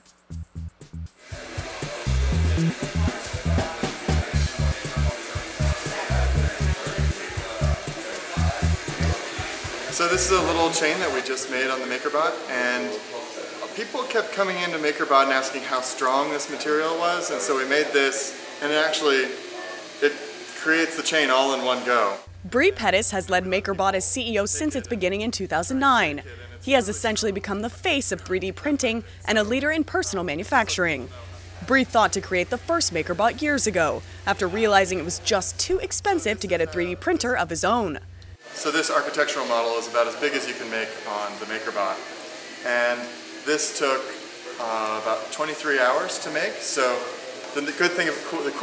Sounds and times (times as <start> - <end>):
Music: 0.0 - 11.3
Speech: 1.6 - 48.6.